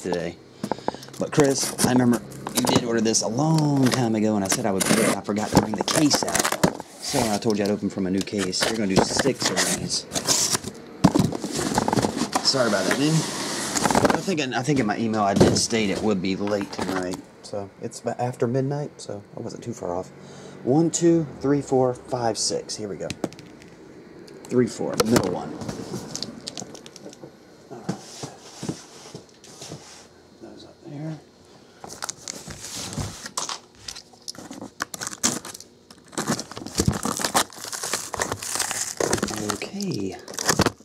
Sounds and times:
Speech: 0.0 - 0.4, 1.2 - 10.1, 12.4 - 13.2, 14.1 - 20.1, 20.7 - 23.2, 24.5 - 25.6, 30.4 - 31.2, 39.2 - 40.3.

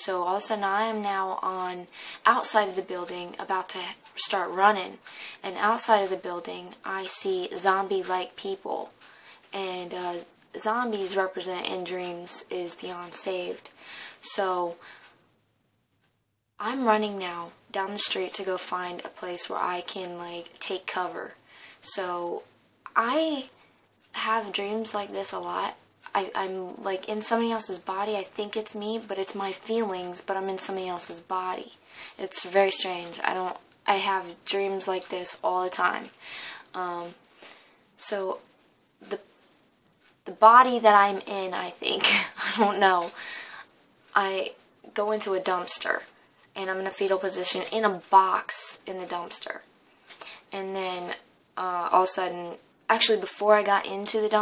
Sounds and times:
Speech: 0.0 - 8.9, 9.5 - 14.8, 16.6 - 23.5, 24.2 - 37.2, 38.0 - 38.4, 40.3 - 43.2, 44.1 - 49.7, 50.5 - 54.4.

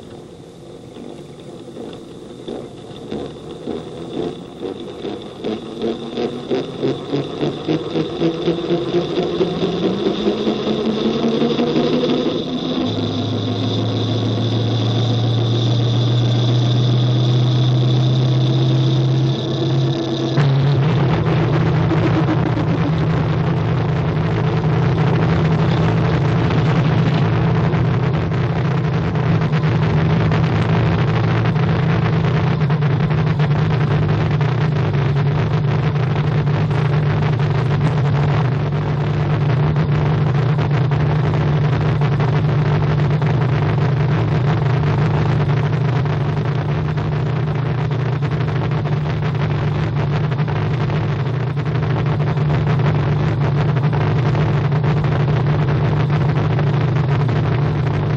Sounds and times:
Outside, rural or natural: 0.0 - 58.1
Race car, auto racing: 0.0 - 58.1.

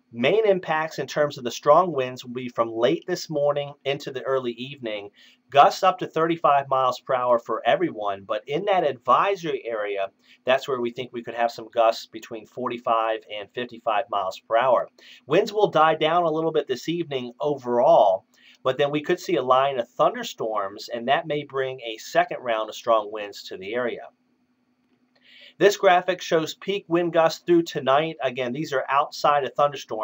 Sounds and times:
Speech: 0.2 - 24.1, 25.6 - 30.0.

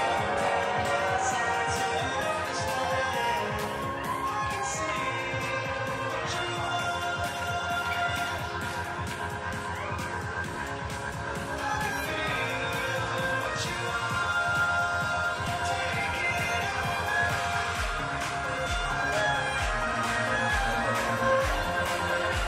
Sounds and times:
Violin, fiddle: 11.4 - 22.4.

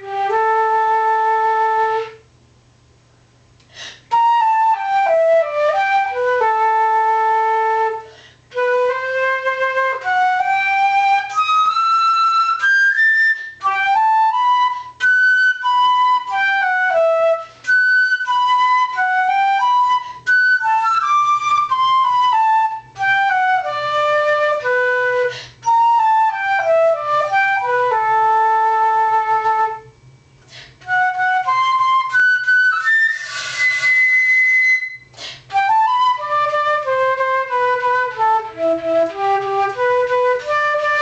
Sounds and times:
Music: 0.0 - 2.3, 4.0 - 41.0.

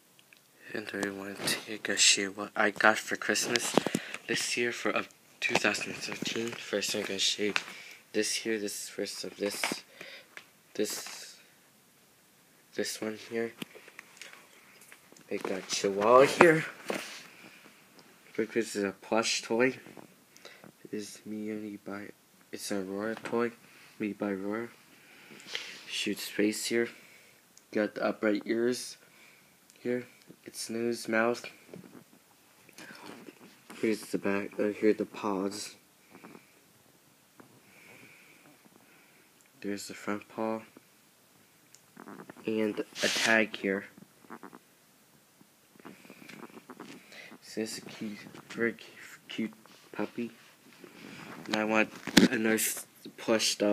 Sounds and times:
Speech: 0.6 - 9.9, 10.8 - 11.5, 12.7 - 13.6, 15.3 - 16.8, 18.4 - 19.8, 20.9 - 24.8, 25.9 - 27.0, 27.7 - 29.0, 29.8 - 31.6, 33.8 - 35.8, 39.6 - 40.8, 42.4 - 44.0, 47.4 - 50.4, 51.5 - 53.7.

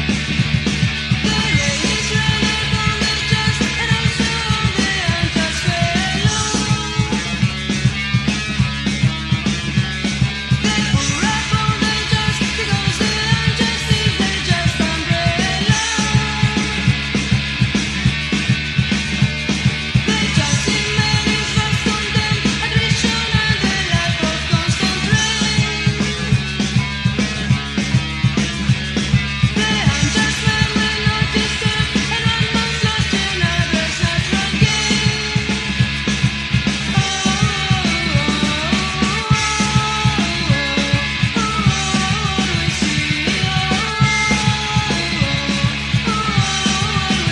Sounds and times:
Music: 0.0 - 47.3.

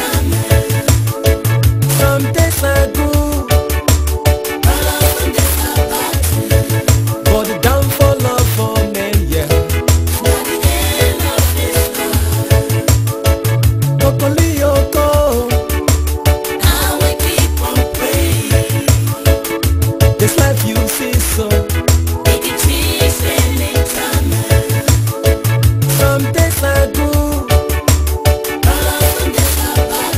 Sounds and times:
Music: 0.0 - 30.1.

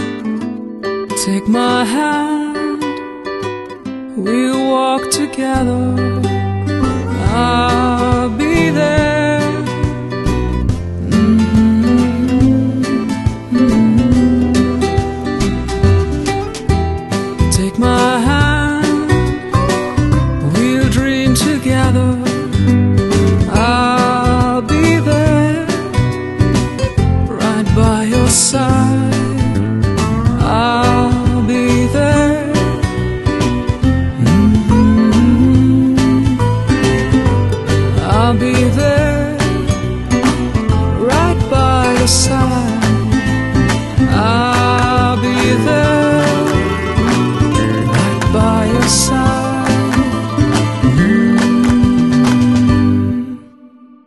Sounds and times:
Soul music: 0.0 - 54.0.

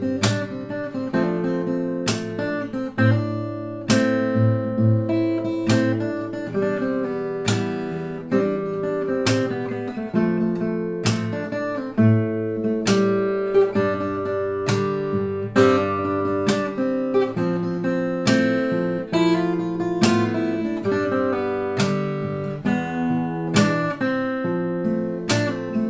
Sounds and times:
Strum: 0.0 - 25.8.

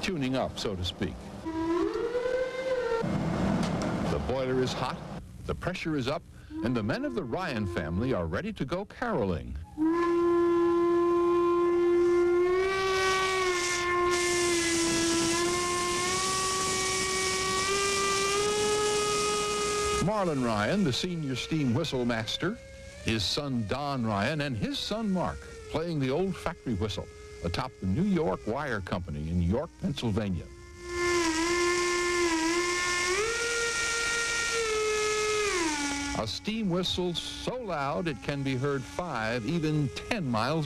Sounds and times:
Steam whistle: 1.4 - 4.8, 6.5 - 8.4, 9.6 - 40.6.

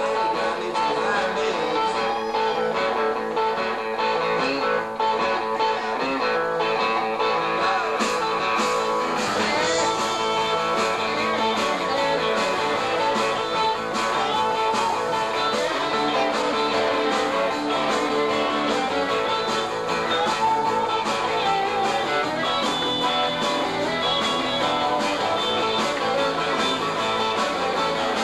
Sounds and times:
Electric guitar: 0.0 - 28.2.

